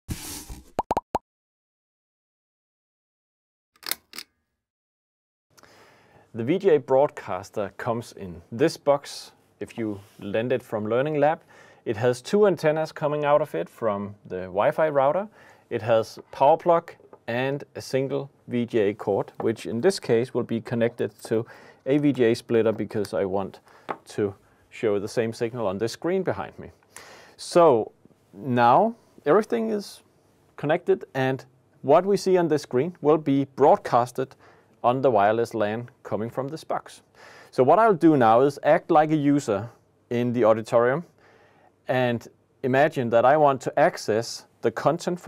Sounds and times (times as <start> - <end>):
Inside, small room: 5.5 - 45.2
Speech: 6.3 - 26.8, 27.4 - 30.0, 30.6 - 41.1, 41.9 - 45.2.